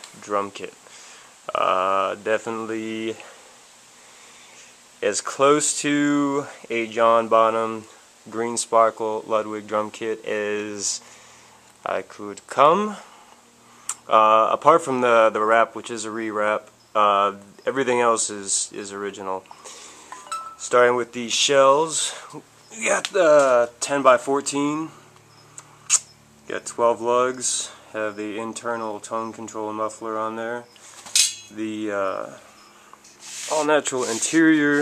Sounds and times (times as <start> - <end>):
Speech: 0.2 - 0.8, 1.5 - 3.3, 5.0 - 11.0, 11.8 - 13.1, 14.1 - 19.5, 20.6 - 25.0, 26.5 - 30.7, 31.5 - 32.4, 33.5 - 34.8.